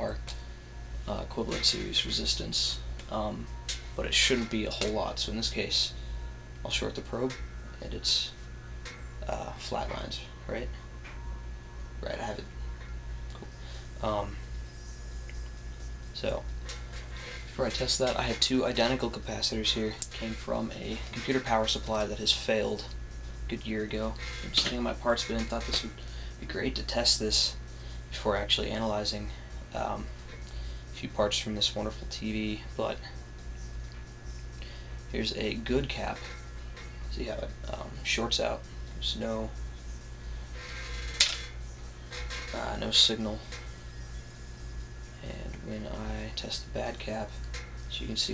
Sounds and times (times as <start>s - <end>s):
Speech: 1.1s - 6.0s, 6.6s - 8.4s, 9.2s - 10.8s, 12.0s - 12.5s, 14.0s - 14.4s, 16.2s - 16.5s, 17.6s - 22.9s, 23.5s - 30.1s, 31.0s - 33.1s, 35.1s - 36.2s, 37.1s - 39.6s, 42.5s - 43.5s, 45.2s - 48.3s.